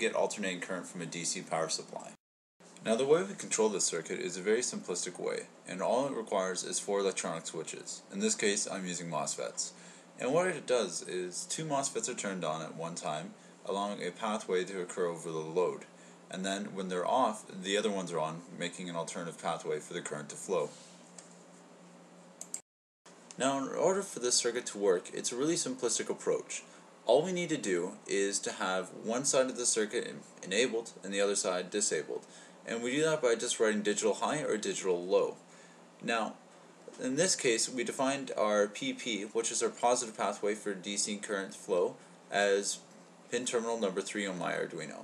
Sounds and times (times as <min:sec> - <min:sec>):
Speech: 0:00.0 - 0:02.2, 0:02.8 - 0:20.8, 0:23.3 - 0:35.4, 0:36.0 - 0:45.0.